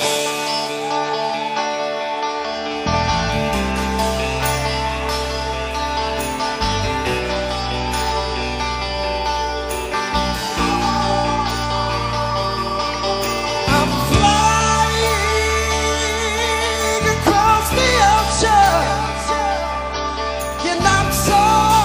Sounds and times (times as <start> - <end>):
Music: 0.0 - 21.8.